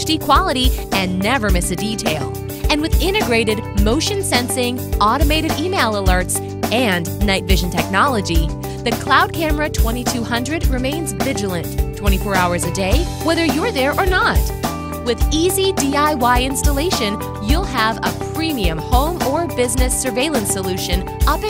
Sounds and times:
Music: 0:00.0 - 0:21.4
Speech: 0:00.0 - 0:21.4.

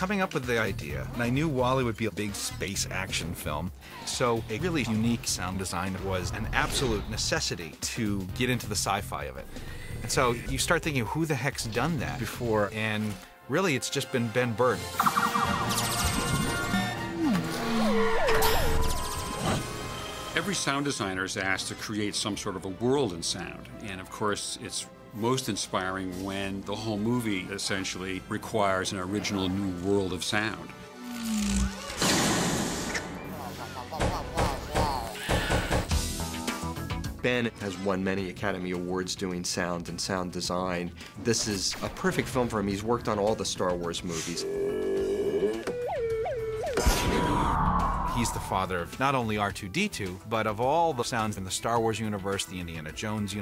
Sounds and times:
Sound effect: 0:06.4 - 0:07.3, 0:15.0 - 0:20.4, 0:31.0 - 0:35.8, 0:46.8 - 0:48.6.

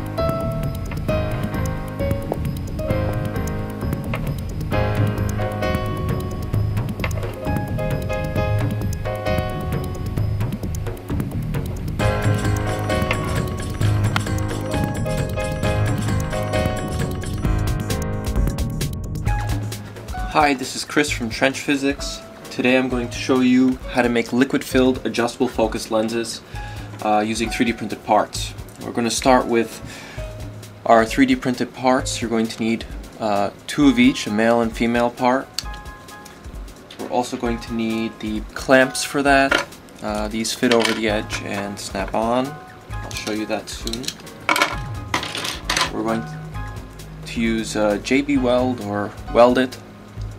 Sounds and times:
Music: 0:00.0 - 0:50.3
Speech: 0:20.2 - 0:26.4, 0:27.0 - 0:29.8, 0:30.8 - 0:35.5, 0:37.0 - 0:44.1, 0:45.9 - 0:46.4, 0:47.3 - 0:49.8.

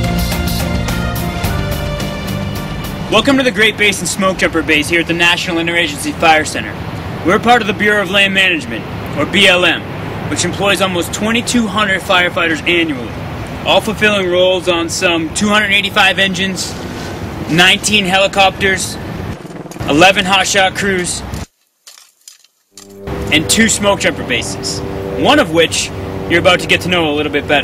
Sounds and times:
Speech: 0:03.1 - 0:13.1, 0:13.7 - 0:16.8, 0:17.5 - 0:19.0, 0:19.9 - 0:21.3, 0:23.3 - 0:27.6.

